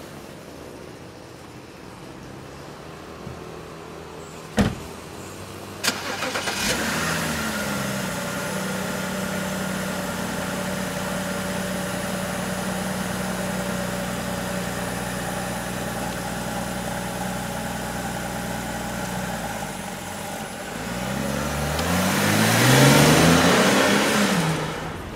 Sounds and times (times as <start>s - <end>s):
Car: 0.0s - 25.1s
Outside, urban or manmade: 0.0s - 25.1s.